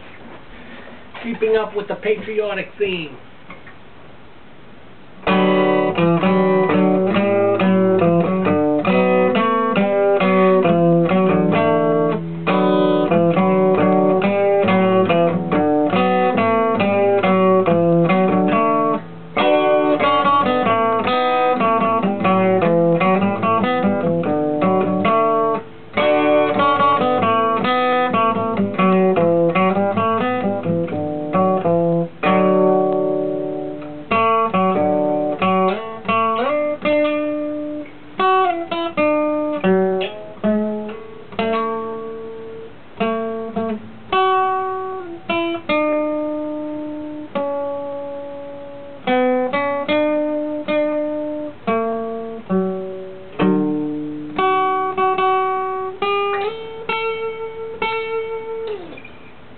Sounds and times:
Acoustic guitar: 0.0 - 59.5.

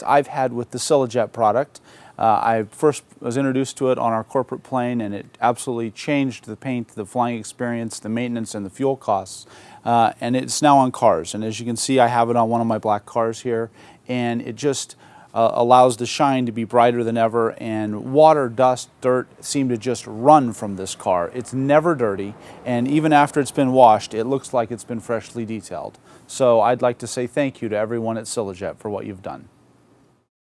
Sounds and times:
Speech: 0.0 - 29.5.

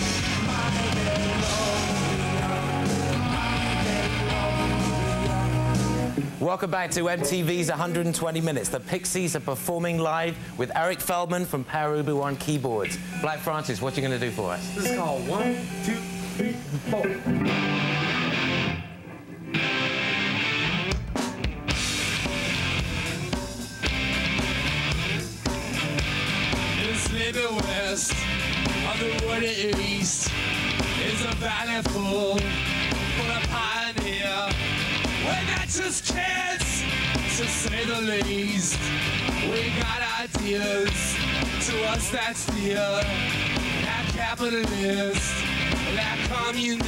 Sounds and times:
Music: 0.0 - 8.7, 10.3 - 46.8
Speech: 6.4 - 17.3.

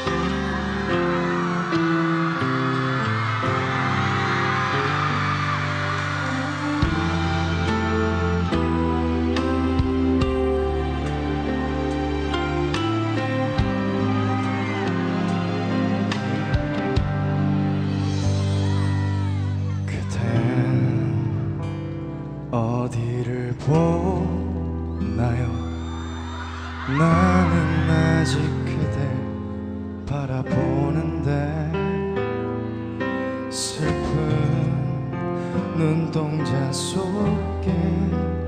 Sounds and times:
Male singing: 0.0 - 2.1, 18.6 - 21.6, 22.5 - 25.8, 26.9 - 29.4, 30.0 - 32.2, 33.5 - 38.4
Music: 0.0 - 38.4.

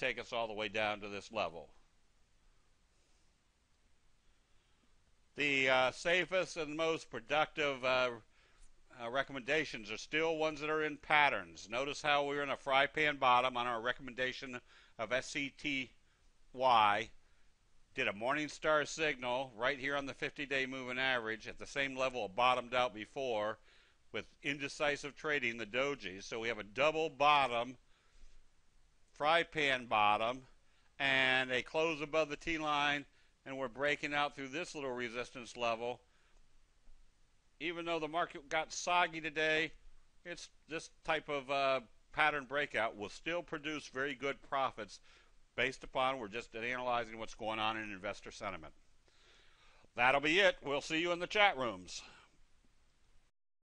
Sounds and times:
Speech: 0.0 - 1.8, 5.4 - 8.3, 8.9 - 17.2, 18.0 - 27.8, 29.2 - 36.1, 37.6 - 45.0, 45.6 - 48.8, 50.0 - 52.2.

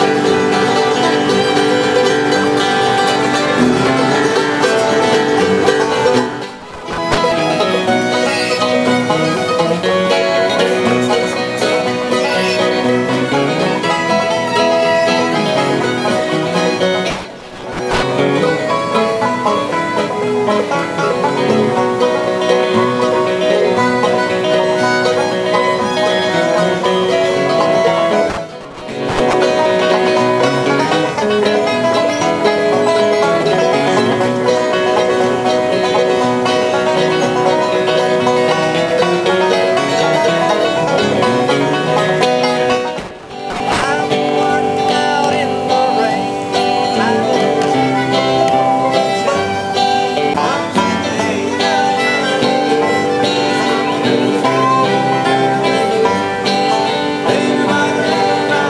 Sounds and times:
Country: 0.0 - 58.6.

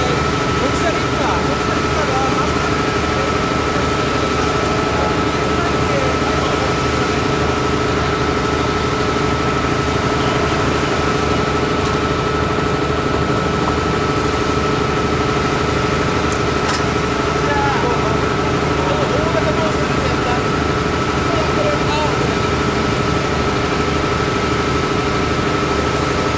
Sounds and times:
Speech: 0.0 - 7.1, 17.4 - 22.6.

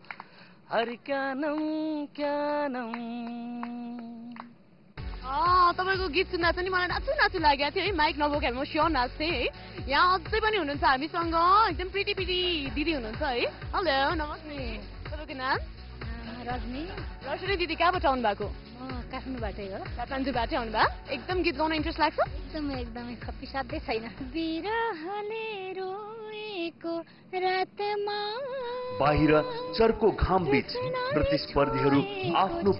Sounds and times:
Female singing: 0.7 - 4.5, 22.1 - 32.7
Music: 4.3 - 32.7.

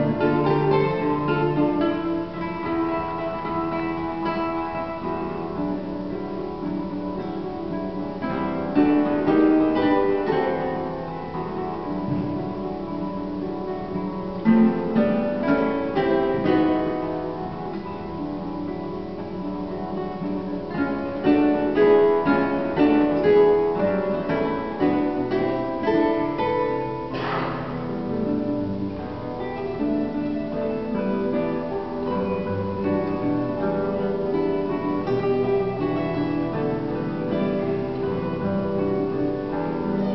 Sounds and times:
Acoustic guitar: 0.0 - 40.1.

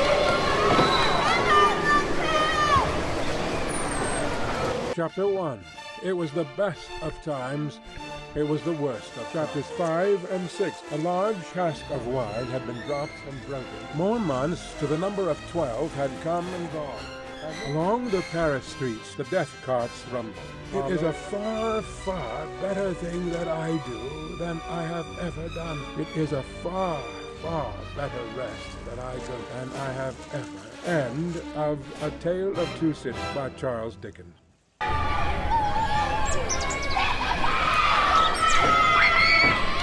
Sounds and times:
Music: 4.9 - 39.8
Speech: 5.0 - 7.8, 8.4 - 34.3.

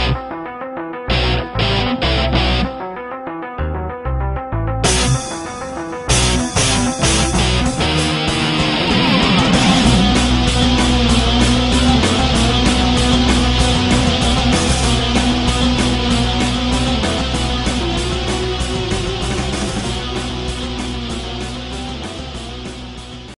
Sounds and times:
Music: 0.0 - 23.3.

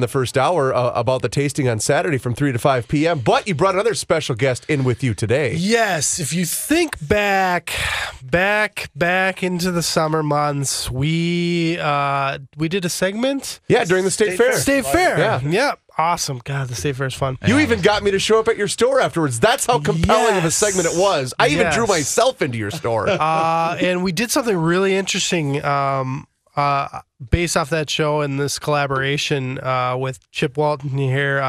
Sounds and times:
Speech: 0.0 - 31.4.

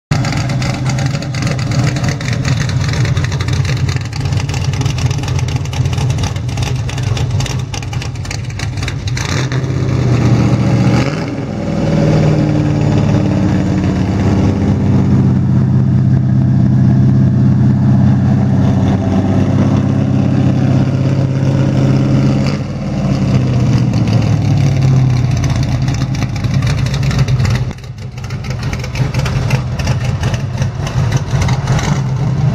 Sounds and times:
Outside, urban or manmade: 0.0 - 32.5
Car: 0.1 - 32.5.

